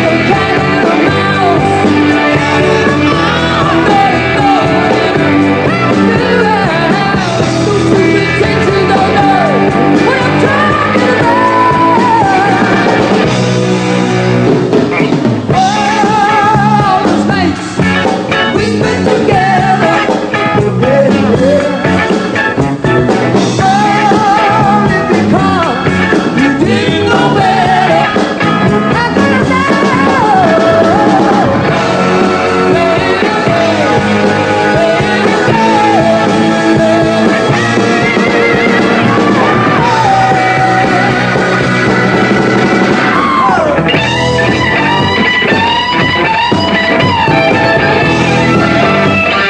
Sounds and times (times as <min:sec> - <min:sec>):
Singing: 0:00.0 - 0:13.0, 0:23.6 - 0:41.8
Music: 0:00.0 - 0:49.5.